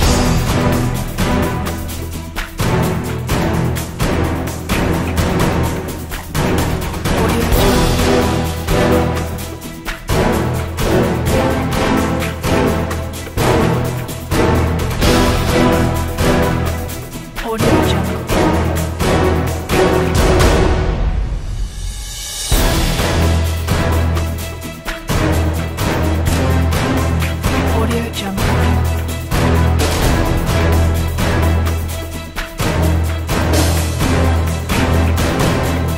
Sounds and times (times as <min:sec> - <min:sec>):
Music: 0:00.0 - 0:35.9.